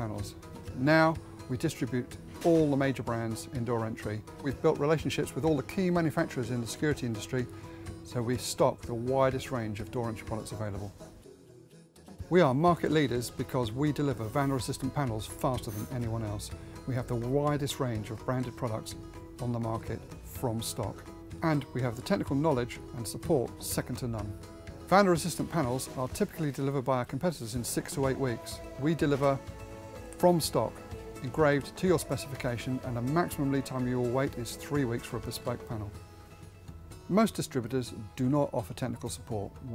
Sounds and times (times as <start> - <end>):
Speech: 0.0 - 7.5, 8.1 - 11.0, 12.2 - 29.4, 30.2 - 36.0, 37.1 - 39.7
Music: 0.0 - 39.7.